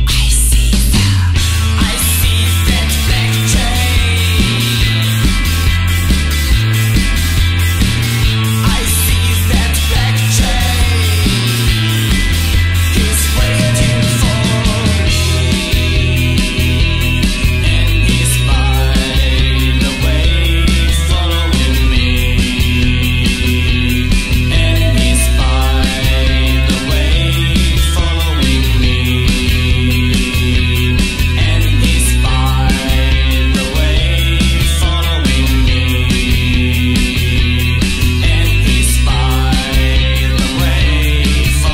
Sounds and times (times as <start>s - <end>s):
Psychedelic rock: 0.0s - 41.7s.